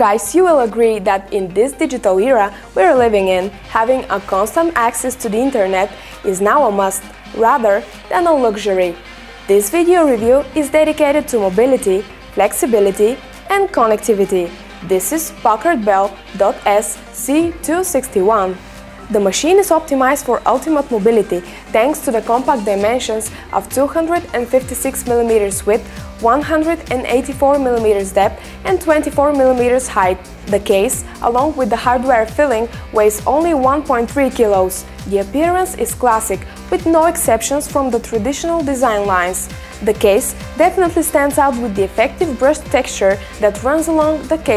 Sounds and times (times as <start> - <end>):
Music: 0.0 - 44.5
Speech: 0.0 - 44.5.